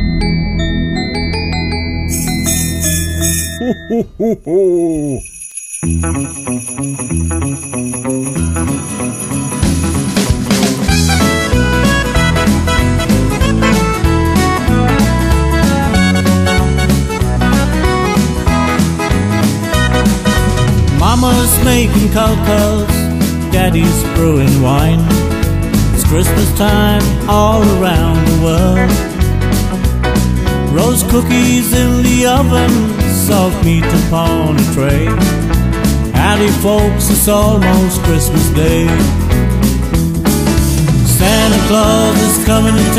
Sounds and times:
Exciting music: 0.0 - 4.1, 9.0 - 22.9
Christmas music: 0.0 - 42.9
Country: 6.2 - 42.9.

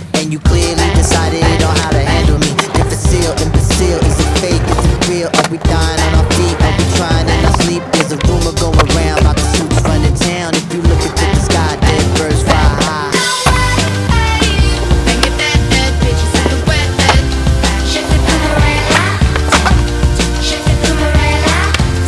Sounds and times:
Skateboard: 0.2 - 22.0.

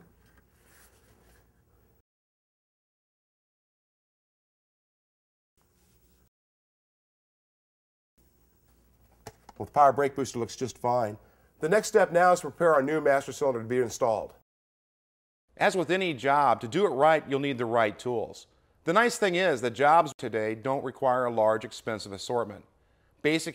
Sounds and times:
Speech: 9.6 - 14.4, 15.6 - 22.7, 23.3 - 23.5.

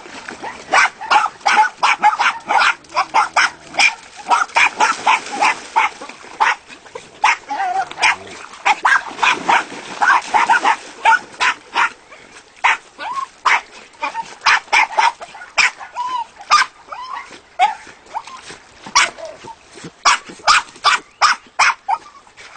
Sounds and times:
Yip: 0.7 - 6.6, 7.2 - 12.0, 12.6 - 17.8, 19.0 - 19.2, 20.0 - 22.1.

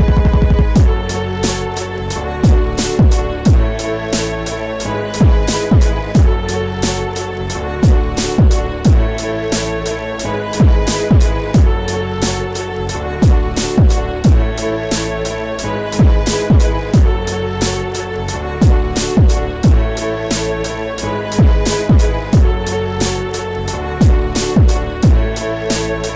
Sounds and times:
Music: 0.0 - 26.1.

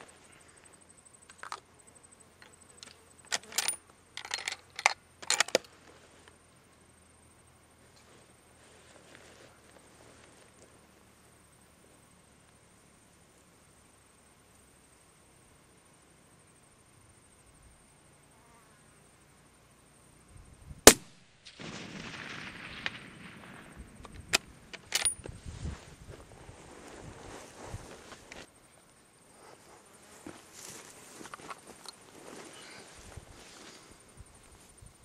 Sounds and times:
Outside, rural or natural: 0.0 - 35.0.

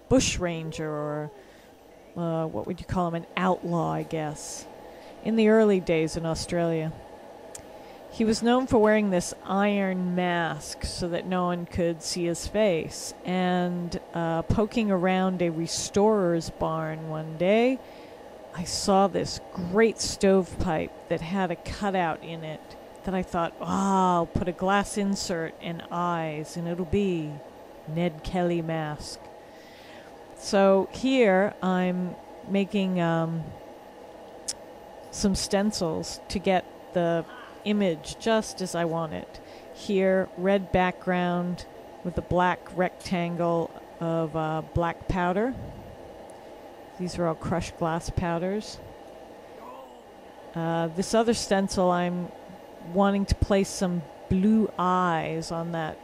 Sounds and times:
Speech: 0.0 - 1.4, 2.1 - 7.0, 8.2 - 17.8, 18.6 - 29.2, 30.4 - 33.6, 35.2 - 45.6, 47.0 - 48.8, 50.6 - 56.0.

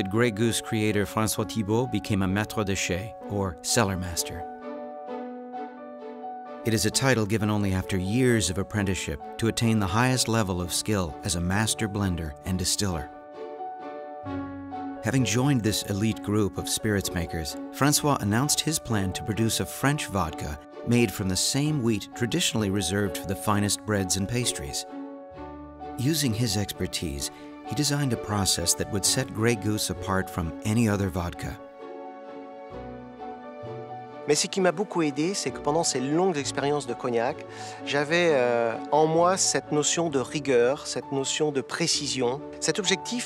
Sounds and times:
Speech: 0.0 - 4.5, 6.7 - 13.1, 15.0 - 24.9, 26.0 - 31.6, 34.3 - 43.2
Music: 0.0 - 43.2.

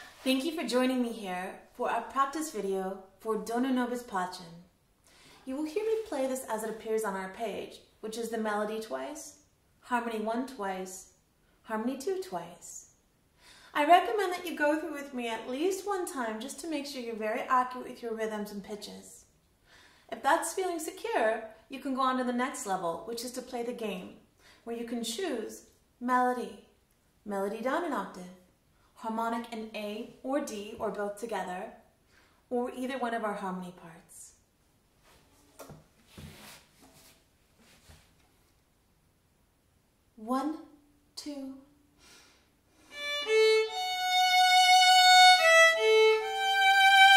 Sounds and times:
Speech: 0.2 - 4.7, 5.4 - 11.1, 11.7 - 13.0, 13.8 - 19.3, 20.1 - 31.8, 32.5 - 34.4, 40.2 - 41.7.

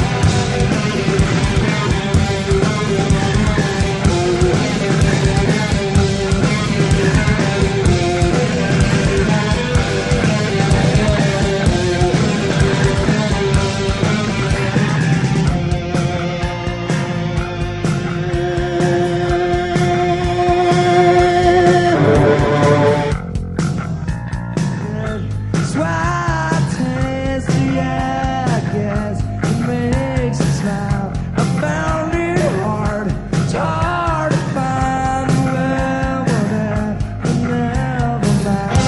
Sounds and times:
Rock music: 0.0 - 38.8.

